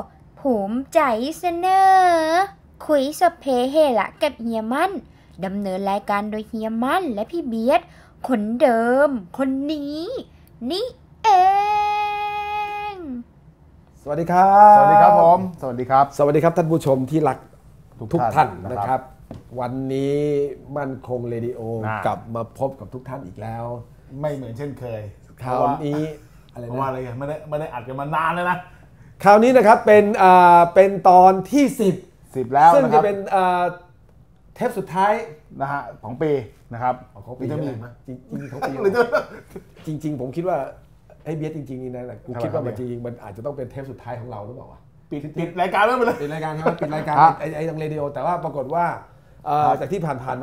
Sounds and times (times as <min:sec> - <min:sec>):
Speech: 0:31.6 - 0:33.8.